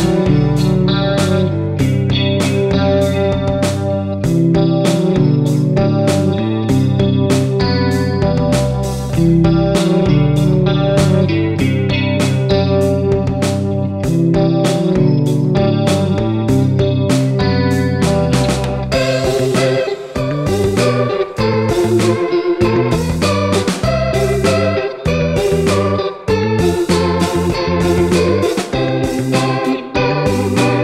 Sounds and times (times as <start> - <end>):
Tapping (guitar technique): 0.0 - 30.8.